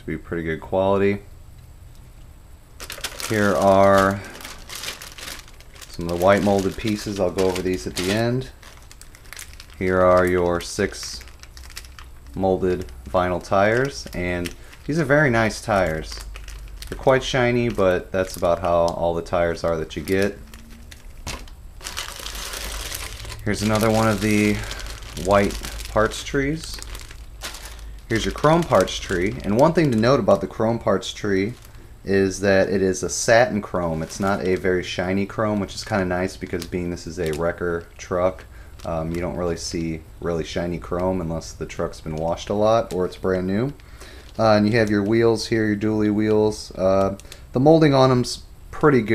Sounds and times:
Speech: 0.0 - 1.3, 3.3 - 4.4, 5.9 - 8.6, 9.8 - 11.3, 12.3 - 16.3, 16.9 - 20.4, 23.4 - 26.9, 28.1 - 43.8, 44.4 - 49.1
Inside, small room: 0.0 - 49.1
Crumpling, crinkling: 2.8 - 48.3.

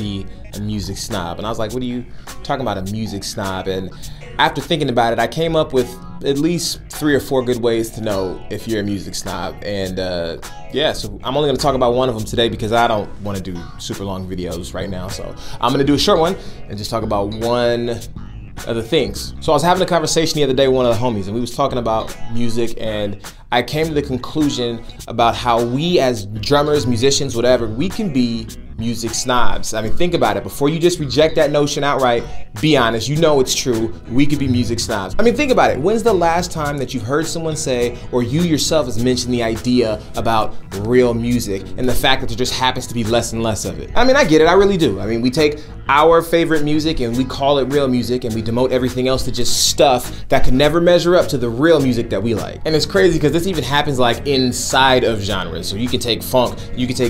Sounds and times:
Music: 0.0 - 57.0
Speech: 0.0 - 57.0.

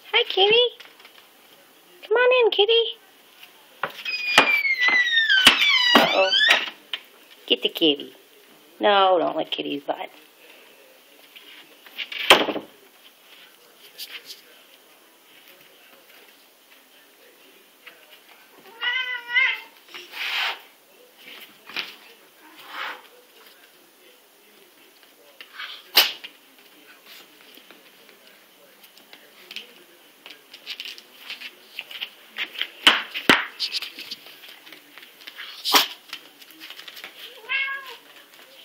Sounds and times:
Speech: 0.0 - 0.8, 1.4 - 4.0, 5.8 - 12.0, 12.6 - 32.9, 33.6 - 38.6.

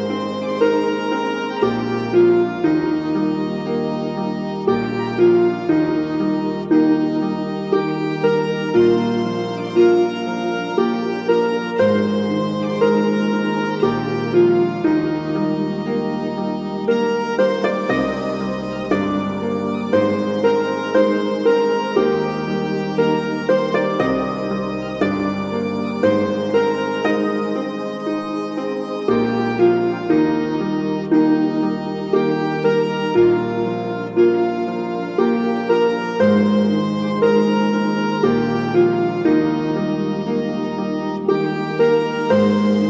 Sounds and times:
Harpsichord: 0.0 - 42.8.

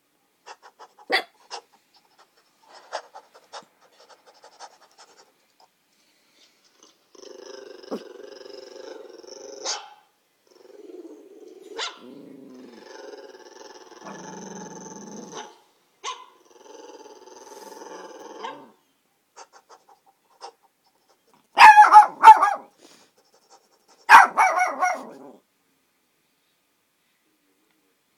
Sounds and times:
Bark: 1.1 - 1.4, 9.6 - 10.1, 11.8 - 12.1, 15.3 - 16.3, 21.6 - 22.7, 24.1 - 25.2
Growling: 6.8 - 9.7, 10.4 - 15.6, 16.4 - 18.8, 24.2 - 25.4
Yip: 9.6 - 10.0, 11.8 - 12.1, 15.3 - 16.3, 21.6 - 22.7, 24.1 - 25.2
Bow-wow: 9.6 - 10.1, 11.8 - 12.2, 15.3 - 16.3, 21.6 - 22.7, 24.1 - 25.3.

